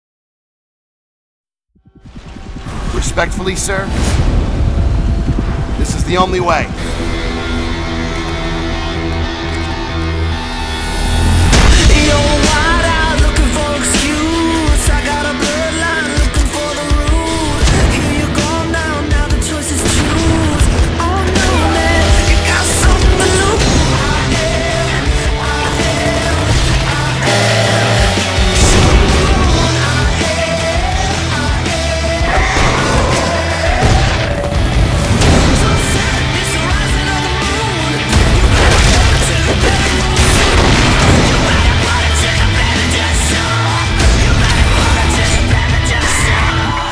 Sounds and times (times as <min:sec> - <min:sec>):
Music: 0:01.8 - 0:46.9.